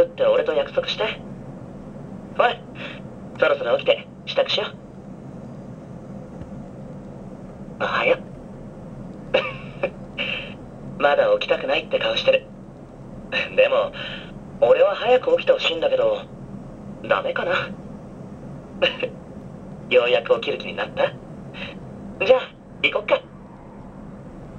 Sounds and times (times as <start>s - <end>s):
Speech: 0.0s - 1.2s, 2.4s - 4.8s, 7.8s - 8.2s, 10.2s - 12.5s, 13.4s - 16.3s, 17.0s - 17.8s, 18.8s - 19.1s, 19.9s - 23.3s.